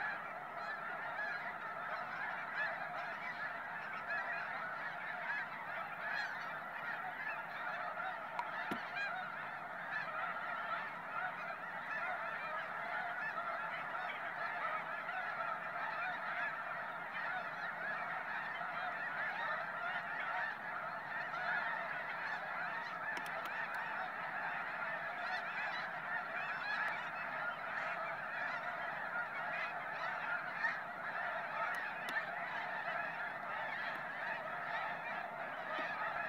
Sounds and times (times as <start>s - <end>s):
Honk: 0.0s - 36.2s.